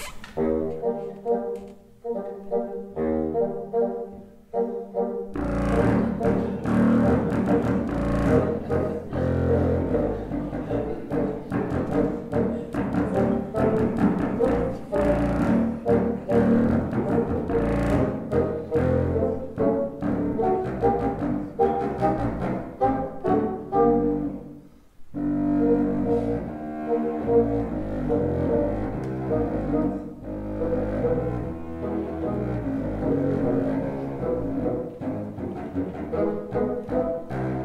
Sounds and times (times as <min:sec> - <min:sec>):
Inside, large room or hall: 0:00.0 - 0:37.6
Music: 0:00.0 - 0:37.6.